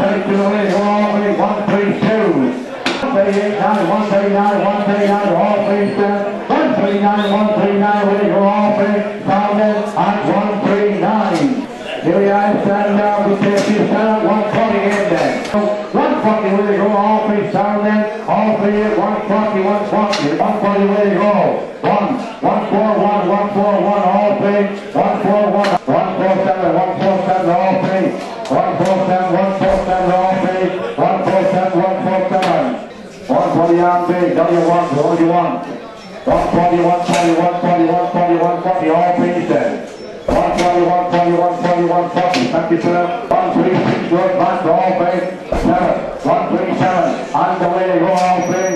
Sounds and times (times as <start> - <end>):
Speech: 0.0 - 48.7.